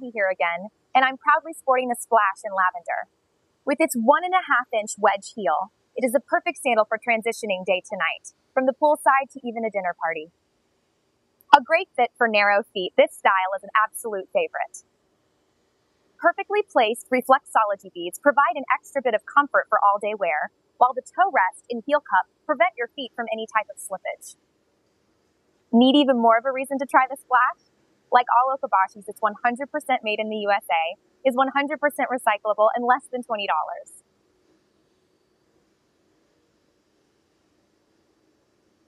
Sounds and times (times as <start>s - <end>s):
Speech: 0.0s - 3.0s, 3.7s - 10.3s, 11.6s - 14.8s, 16.2s - 24.3s, 25.8s - 27.6s, 28.2s - 33.9s.